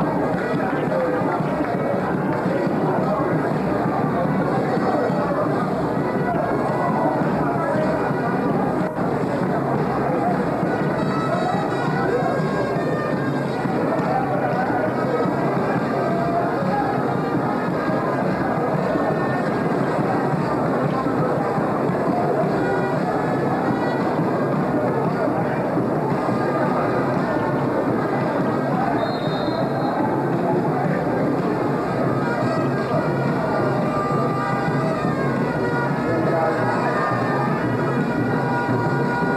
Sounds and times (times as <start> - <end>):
Wind instrument, woodwind instrument: 0.0 - 39.3.